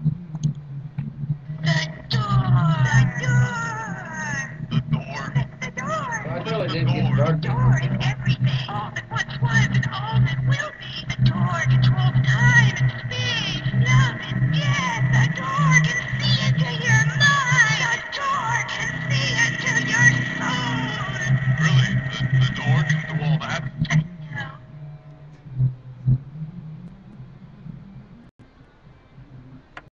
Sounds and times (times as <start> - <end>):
Speech: 1.6 - 24.6.